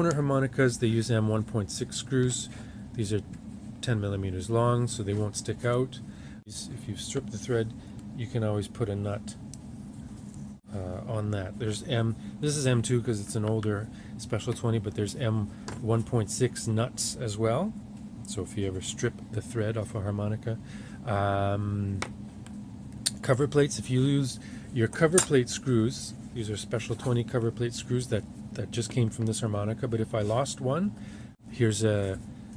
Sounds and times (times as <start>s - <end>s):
Speech: 0.0s - 9.4s, 10.7s - 22.1s, 23.1s - 32.3s.